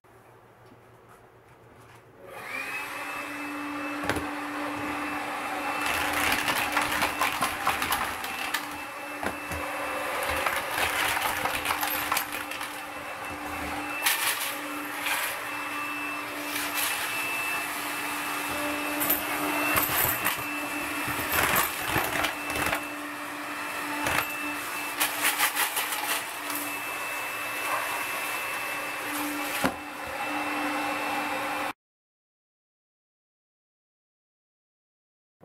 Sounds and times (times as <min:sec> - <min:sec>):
Vacuum cleaner: 0:02.2 - 0:31.8.